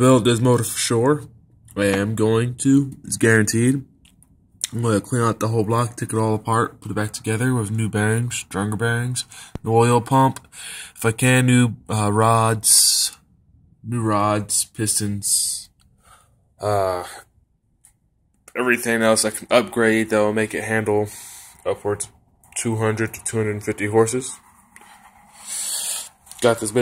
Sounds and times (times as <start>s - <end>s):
Speech: 0.0s - 3.9s, 4.6s - 10.4s, 11.0s - 13.2s, 13.8s - 15.7s, 16.6s - 17.3s, 18.5s - 24.4s, 26.4s - 26.8s.